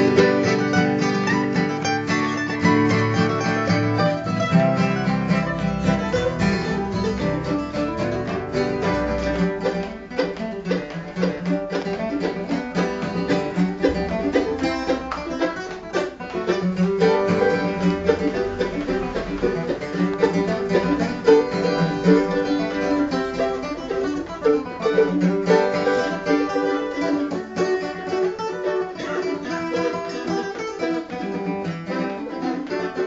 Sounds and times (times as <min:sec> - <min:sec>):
Acoustic guitar: 0:00.0 - 0:33.0
Strum: 0:00.0 - 0:33.0.